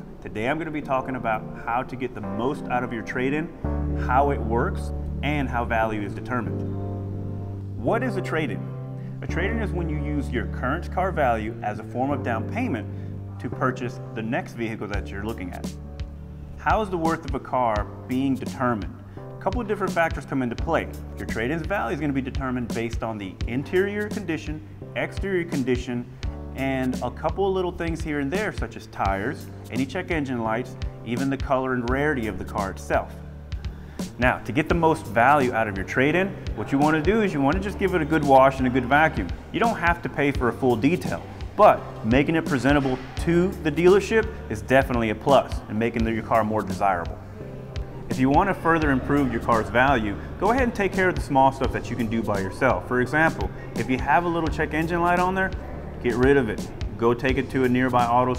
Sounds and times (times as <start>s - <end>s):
Speech: 0.0s - 6.6s, 7.8s - 15.7s, 16.6s - 33.2s, 34.2s - 47.2s, 48.1s - 58.3s
Music: 0.0s - 58.3s.